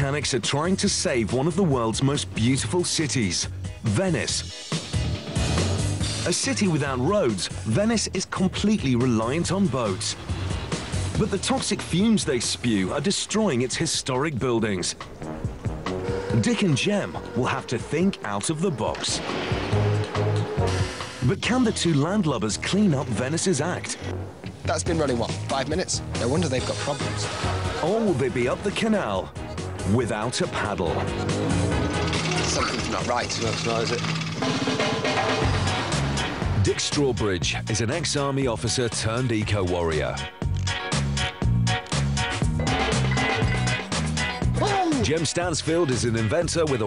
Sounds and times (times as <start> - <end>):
Speech: 0.0 - 4.5, 6.2 - 10.2, 11.2 - 15.0, 16.3 - 19.2, 21.2 - 24.0, 24.7 - 29.3, 29.9 - 31.1, 32.3 - 34.1, 36.7 - 40.3, 44.6 - 46.8
Music: 0.0 - 46.8.